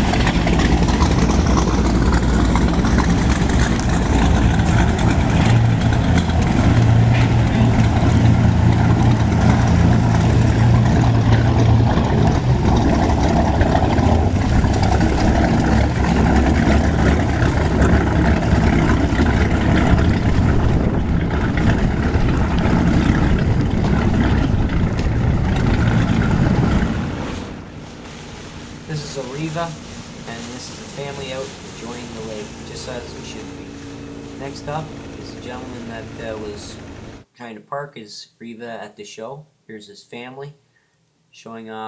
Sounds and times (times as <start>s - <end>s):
Engine: 0.0s - 37.3s
Motorboat, speedboat: 0.0s - 37.3s.